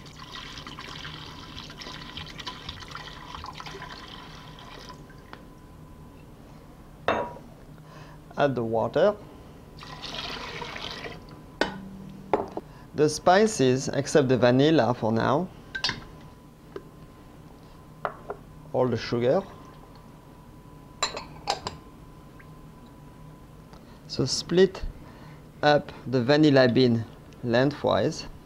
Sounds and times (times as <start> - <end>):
Fill (with liquid): 0.0 - 5.3, 9.8 - 11.2
Speech: 8.4 - 9.2, 13.0 - 15.5, 18.7 - 19.6, 24.1 - 24.9, 25.6 - 28.4.